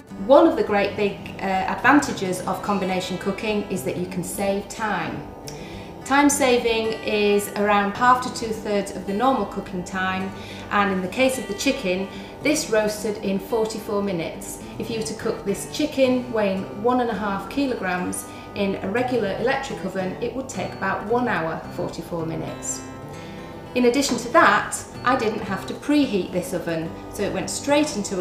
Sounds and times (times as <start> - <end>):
Music: 0.0 - 28.2
Speech: 0.2 - 5.2, 6.1 - 22.8, 23.8 - 28.2.